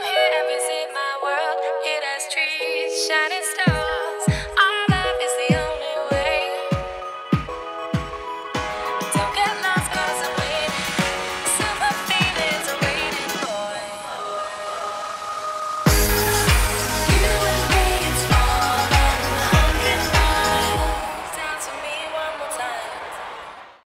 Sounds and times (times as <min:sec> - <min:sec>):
Soundtrack music: 0:03.6 - 0:22.0.